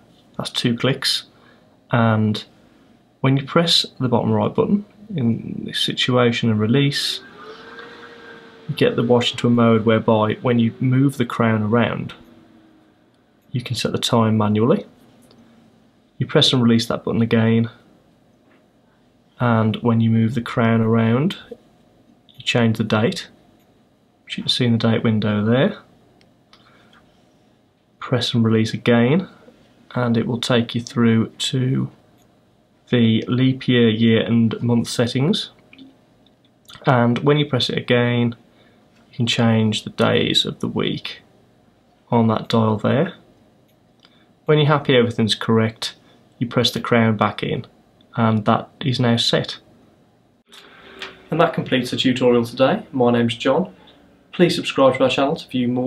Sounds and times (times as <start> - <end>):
Speech: 0.4 - 2.6, 3.2 - 7.6, 8.6 - 12.4, 13.5 - 15.0, 16.2 - 17.9, 19.4 - 21.6, 22.3 - 23.4, 24.3 - 25.9, 28.0 - 32.0, 32.9 - 35.6, 36.7 - 38.4, 39.1 - 41.3, 42.1 - 43.3, 44.5 - 49.7, 51.3 - 55.8.